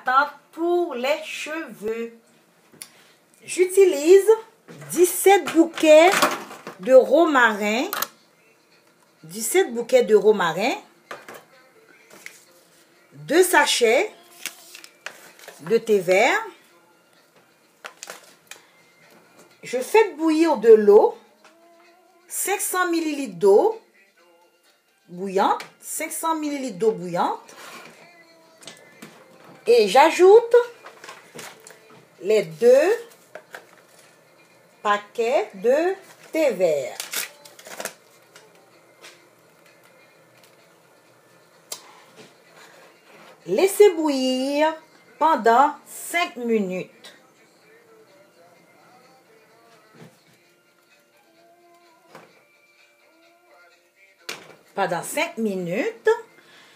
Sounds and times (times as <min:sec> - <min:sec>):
Speech: 0:00.0 - 0:02.2, 0:03.4 - 0:08.0, 0:09.3 - 0:10.9, 0:13.2 - 0:14.2, 0:15.6 - 0:16.6, 0:19.7 - 0:21.2, 0:22.3 - 0:23.8, 0:25.1 - 0:27.4, 0:29.7 - 0:30.8, 0:32.2 - 0:33.1, 0:34.9 - 0:37.1, 0:43.5 - 0:47.2, 0:54.8 - 0:56.3
Music: 0:00.0 - 0:56.7.